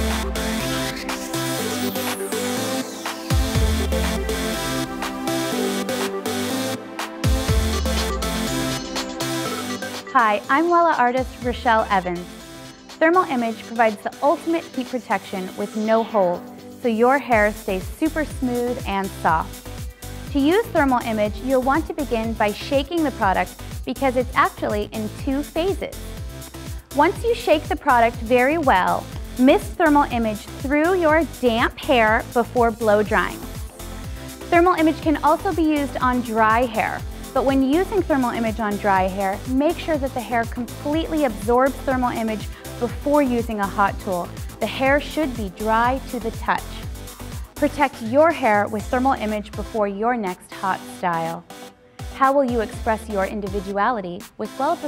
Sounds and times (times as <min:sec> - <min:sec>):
Music: 0:00.0 - 0:54.8
Speech: 0:10.2 - 0:12.3, 0:13.0 - 0:19.5, 0:20.3 - 0:25.9, 0:27.0 - 0:33.4, 0:34.5 - 0:46.8, 0:47.6 - 0:51.4, 0:52.2 - 0:54.8.